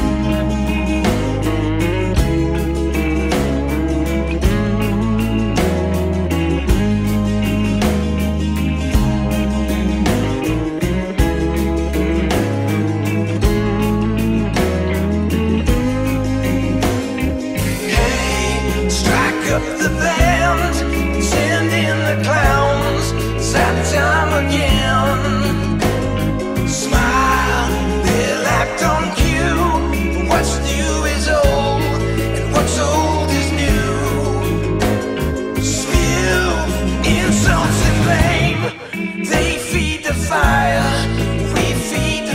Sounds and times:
Music: 0:00.0 - 0:42.3.

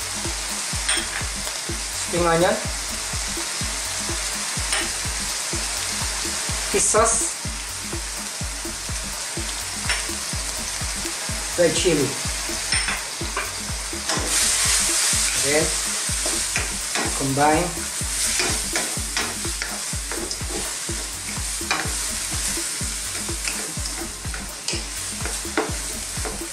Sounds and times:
Frying (food): 0:00.0 - 0:26.5.

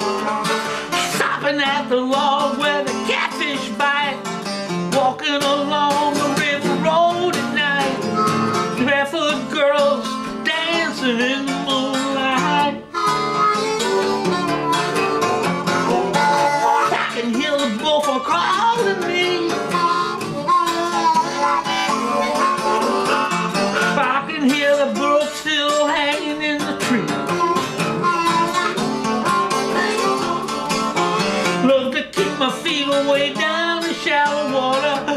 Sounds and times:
Wind instrument, woodwind instrument: 0:00.0 - 0:01.0, 0:08.0 - 0:08.8, 0:12.8 - 0:17.0, 0:19.5 - 0:23.8, 0:27.2 - 0:31.6
Harmonica: 0:00.0 - 0:35.1.

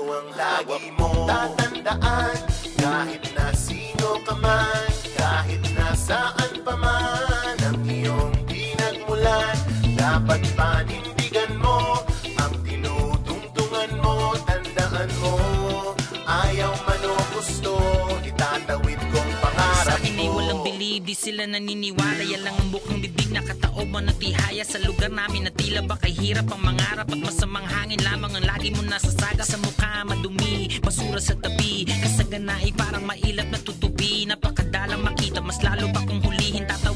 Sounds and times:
Background music: 0:00.0 - 0:36.9.

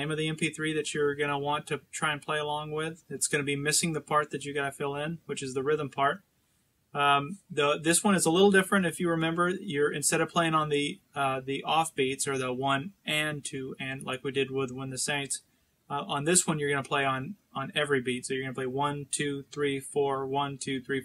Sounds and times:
Speech: 0:00.0 - 0:06.2, 0:07.0 - 0:21.0.

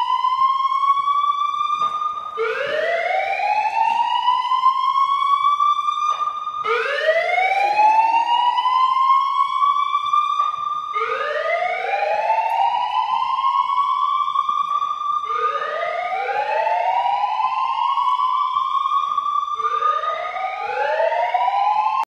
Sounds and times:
Siren: 0:00.0 - 0:22.0.

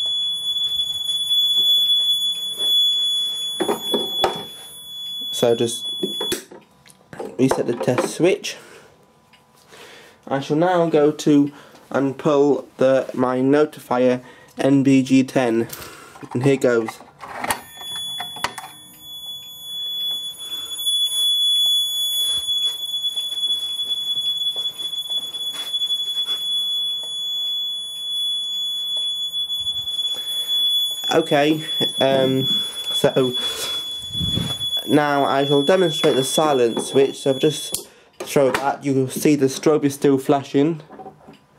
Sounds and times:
Smoke detector, smoke alarm: 0:00.0 - 0:06.6, 0:17.5 - 0:38.1.

